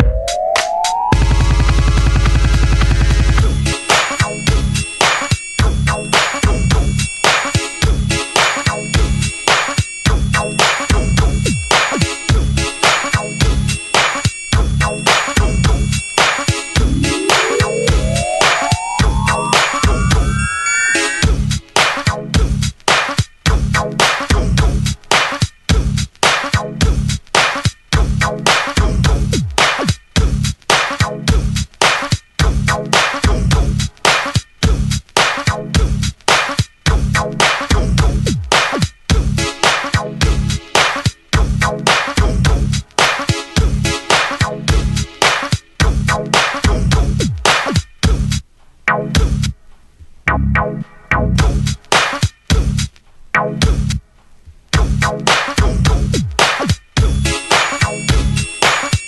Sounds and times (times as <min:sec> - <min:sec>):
Funk: 0:21.2 - 0:49.5, 0:50.3 - 0:54.0, 0:54.7 - 0:58.9.